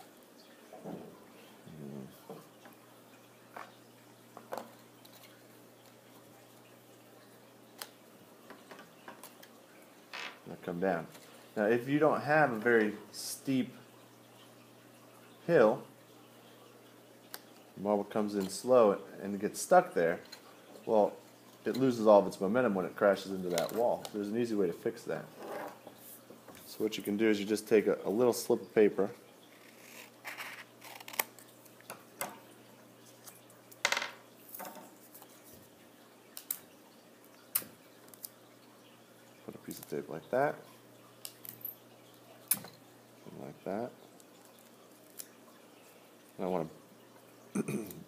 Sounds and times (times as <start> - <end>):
Speech: 10.5 - 13.8, 15.4 - 15.9, 17.8 - 20.3, 20.9 - 25.3, 26.7 - 29.2, 39.5 - 40.7, 43.2 - 44.0, 46.4 - 46.8.